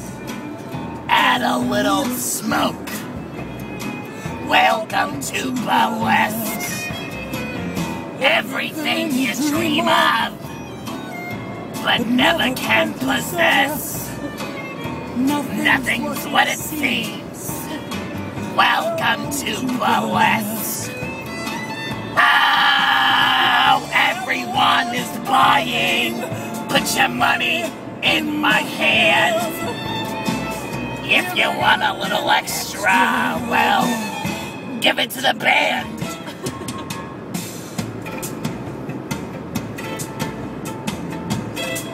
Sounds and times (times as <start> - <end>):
Music: 0.0 - 41.9
Male singing: 1.1 - 3.0, 4.4 - 6.8, 8.2 - 10.4, 11.8 - 14.2, 15.2 - 17.8, 18.5 - 20.9, 22.2 - 29.7, 31.0 - 36.1.